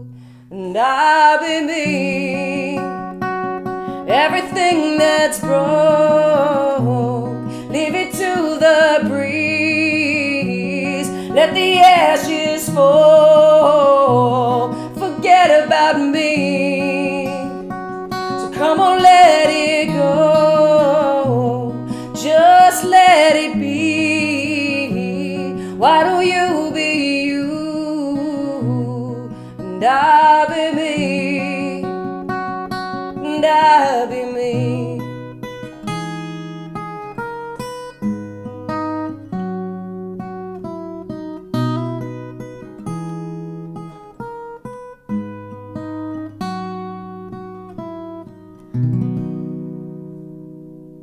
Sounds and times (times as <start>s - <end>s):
Acoustic guitar: 0.0s - 51.0s.